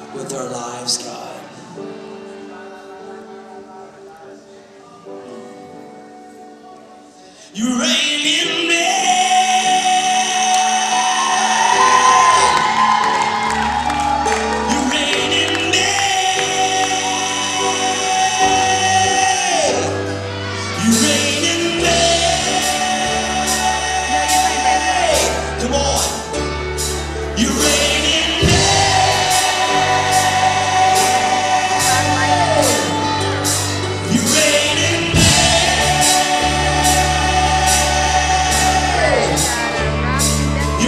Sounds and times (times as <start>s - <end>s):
Music: 0.0s - 40.8s
Male singing: 7.5s - 12.8s, 14.6s - 26.4s, 27.3s - 40.8s.